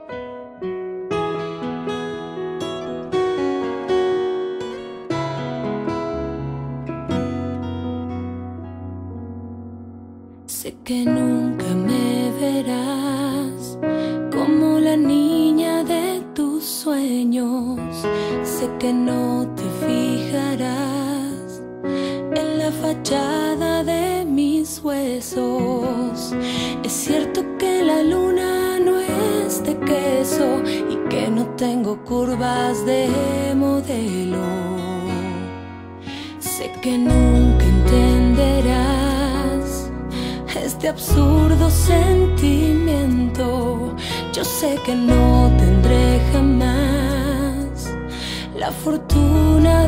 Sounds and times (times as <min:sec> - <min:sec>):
Music: 0:00.0 - 0:49.8.